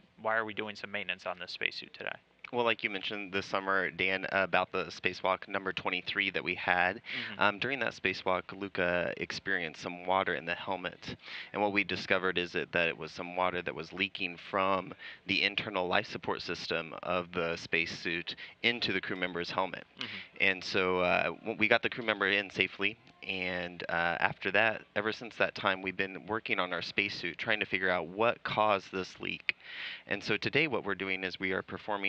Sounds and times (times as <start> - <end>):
Speech: 0.2 - 32.0.